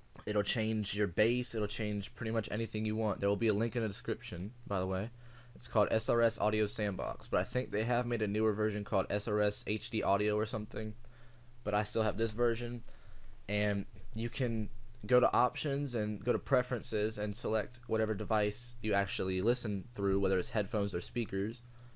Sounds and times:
Speech: 0:00.2 - 0:11.0, 0:11.6 - 0:12.9, 0:13.5 - 0:21.6.

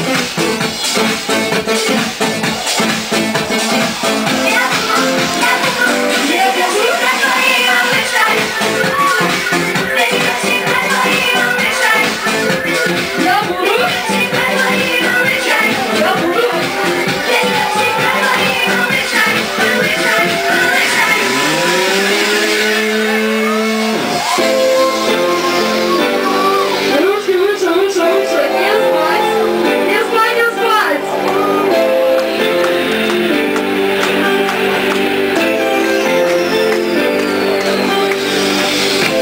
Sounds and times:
Music: 0:00.0 - 0:39.2.

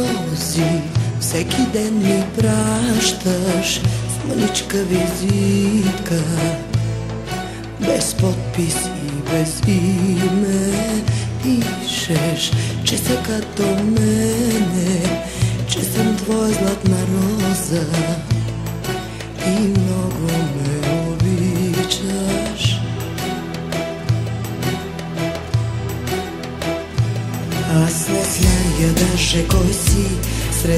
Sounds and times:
Soundtrack music: 0:00.0 - 0:30.7.

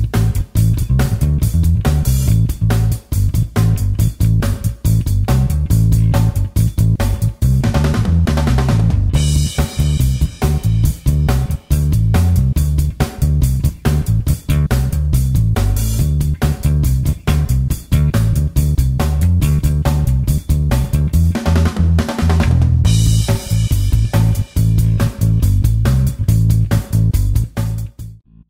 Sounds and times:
Music: 0:00.0 - 0:28.5.

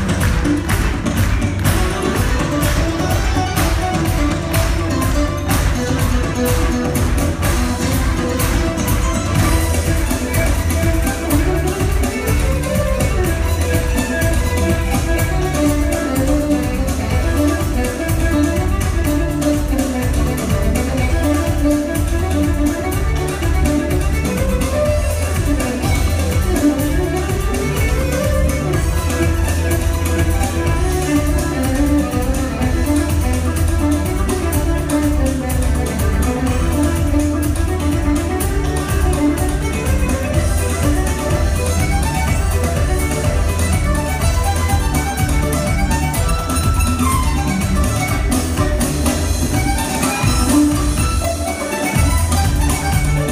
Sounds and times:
Music of Latin America: 0:00.0 - 0:53.3
Violin, fiddle: 0:00.0 - 0:53.3.

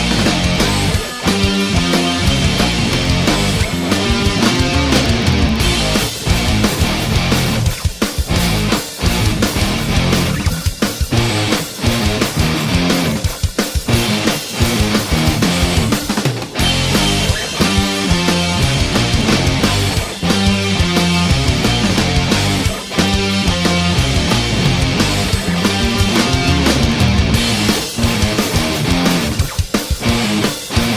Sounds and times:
Progressive rock: 0:00.0 - 0:30.9
Punk rock: 0:00.0 - 0:30.9
Rock and roll: 0:00.0 - 0:30.9.

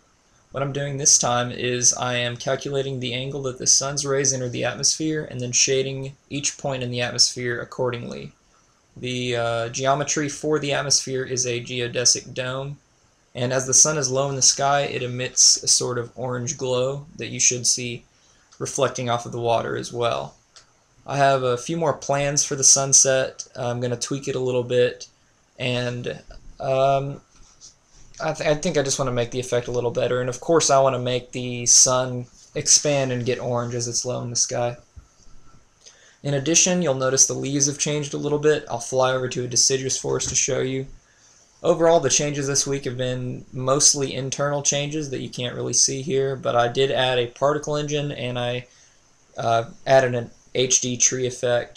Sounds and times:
Speech: 0:00.6 - 0:08.4, 0:09.0 - 0:12.8, 0:13.4 - 0:18.0, 0:18.6 - 0:20.4, 0:21.1 - 0:27.3, 0:28.2 - 0:34.9, 0:36.2 - 0:41.0, 0:41.6 - 0:48.7, 0:49.4 - 0:51.7.

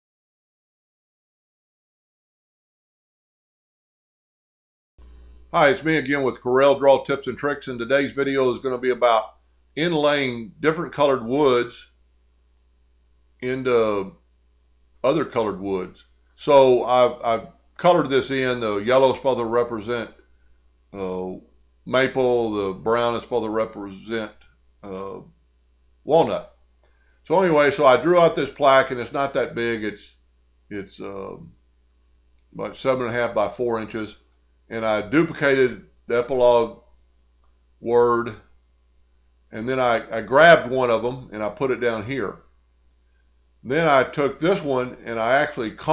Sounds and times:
Speech: 0:05.6 - 0:11.9, 0:13.4 - 0:14.2, 0:15.0 - 0:20.2, 0:21.0 - 0:25.3, 0:26.1 - 0:26.5, 0:27.3 - 0:31.5, 0:32.6 - 0:36.8, 0:37.8 - 0:38.5, 0:39.6 - 0:42.4, 0:43.7 - 0:45.9.

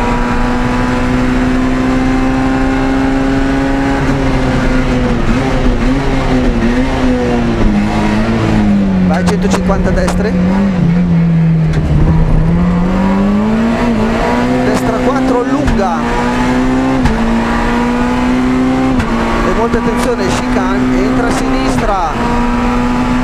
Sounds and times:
Car: 0:00.0 - 0:23.2
Speech: 0:09.1 - 0:10.4, 0:14.6 - 0:16.1, 0:19.5 - 0:22.2.

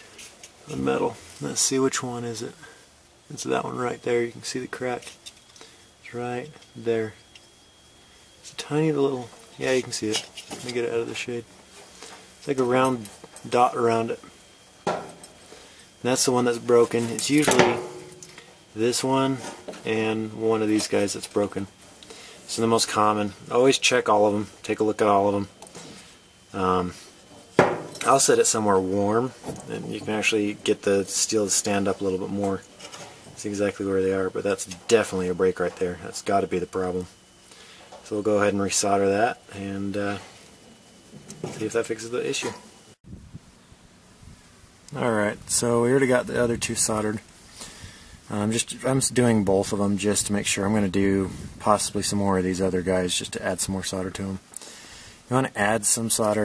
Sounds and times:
Speech: 0:00.6 - 0:05.1, 0:06.0 - 0:07.2, 0:08.4 - 0:11.5, 0:12.4 - 0:14.3, 0:16.0 - 0:17.8, 0:18.8 - 0:21.7, 0:22.5 - 0:25.5, 0:26.5 - 0:27.0, 0:28.0 - 0:32.7, 0:33.4 - 0:37.2, 0:38.0 - 0:40.3, 0:41.4 - 0:42.6, 0:44.9 - 0:47.3, 0:48.3 - 0:54.4, 0:55.3 - 0:56.4.

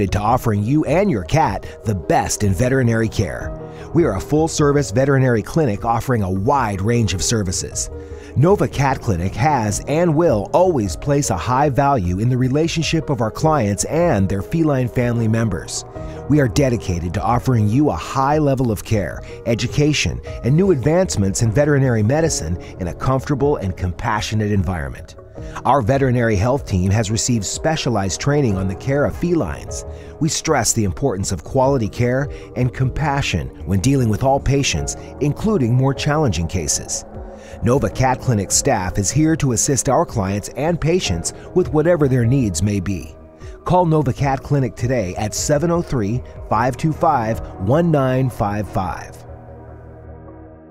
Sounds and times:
Speech: 0:00.0 - 0:37.0, 0:37.6 - 0:49.2
Music: 0:00.0 - 0:50.7.

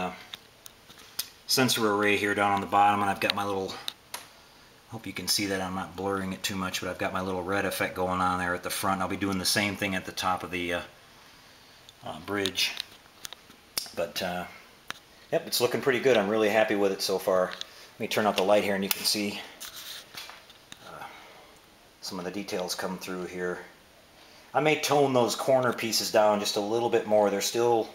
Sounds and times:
Speech: 0:00.0 - 0:00.3, 0:01.5 - 0:04.0, 0:04.9 - 0:11.0, 0:12.0 - 0:12.9, 0:13.8 - 0:14.6, 0:15.3 - 0:19.6, 0:22.0 - 0:23.8, 0:24.5 - 0:27.9
Inside, small room: 0:00.0 - 0:27.9.

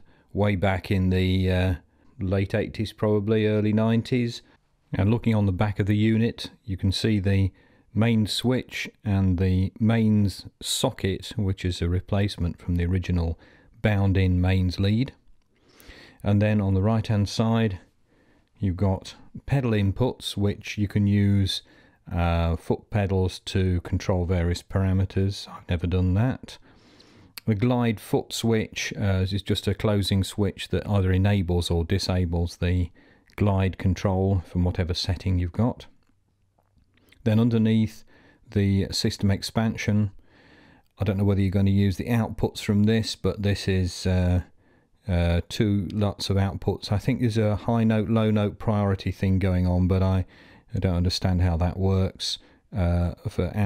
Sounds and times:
Speech: 0:00.0 - 0:15.2, 0:16.2 - 0:17.9, 0:18.6 - 0:26.6, 0:27.4 - 0:36.0, 0:37.2 - 0:40.2, 0:41.0 - 0:53.6.

